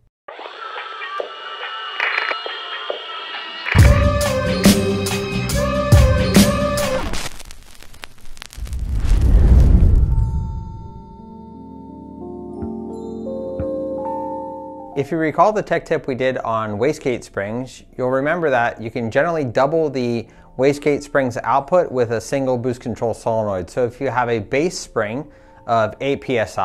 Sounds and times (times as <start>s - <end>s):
Music: 0.3s - 7.2s, 10.2s - 26.6s
Male speech, man speaking: 15.0s - 26.6s.